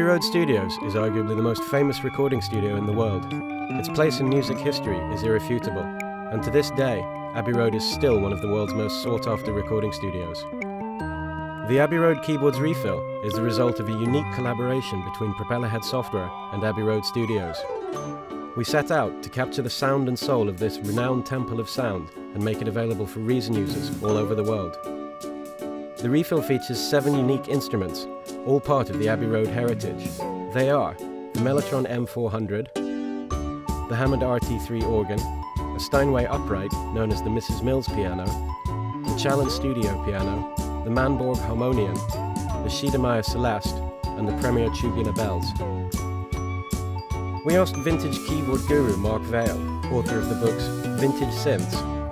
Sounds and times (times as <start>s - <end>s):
Speech: 0.0s - 10.4s, 11.7s - 17.7s, 18.6s - 24.8s, 26.0s - 32.7s, 33.9s - 38.4s, 39.1s - 45.8s, 47.4s - 51.8s
Piano: 0.0s - 52.1s.